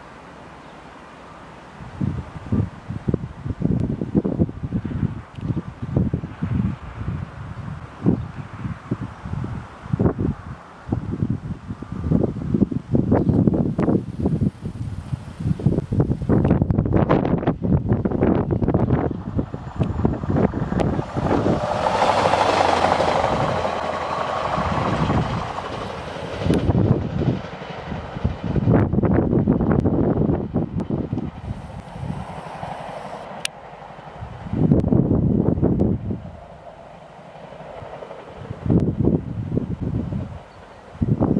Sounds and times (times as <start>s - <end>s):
Wind noise (microphone): 1.8s - 23.8s, 24.4s - 32.4s, 34.2s - 36.4s, 38.4s - 41.3s.